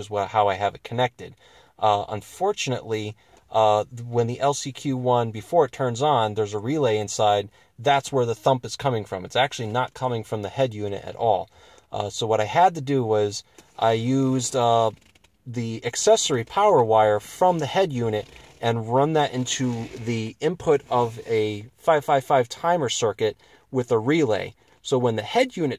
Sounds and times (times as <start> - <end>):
Speech: 0.0 - 25.7.